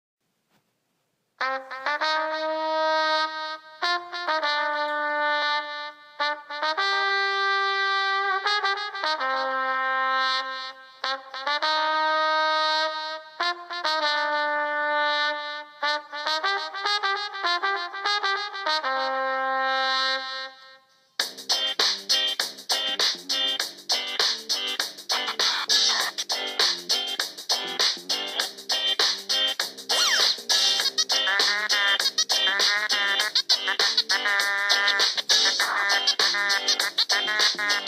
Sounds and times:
Brass instrument: 1.4 - 37.8.

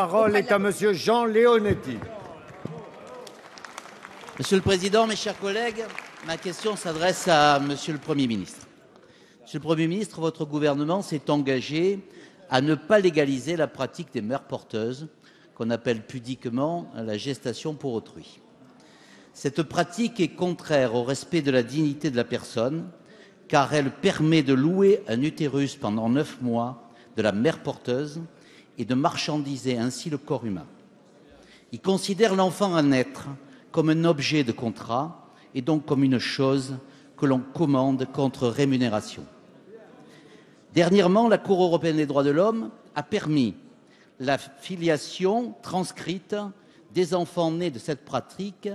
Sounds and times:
Speech: 0.0 - 3.3, 4.4 - 8.7, 9.4 - 18.4, 19.4 - 43.6, 44.2 - 48.7.

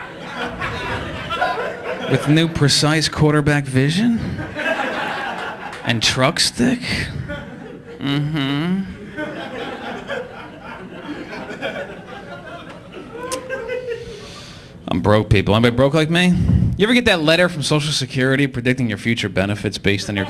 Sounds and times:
Laughter: 0.0 - 2.6, 4.2 - 5.9, 6.9 - 8.2, 8.8 - 14.3
Speech: 2.1 - 4.5, 5.8 - 7.3, 8.0 - 9.0, 14.9 - 20.2.

